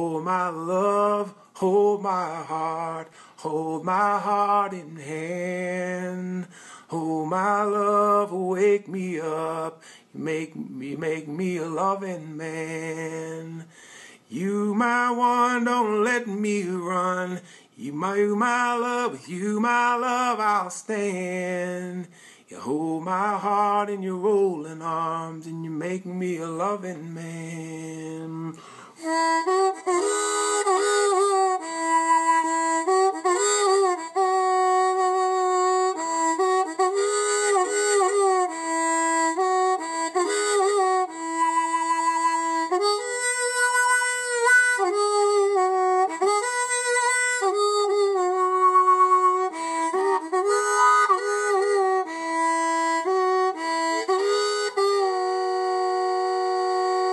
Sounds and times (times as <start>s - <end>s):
Harmonica: 0.0s - 9.8s, 10.5s - 13.6s, 14.3s - 57.1s.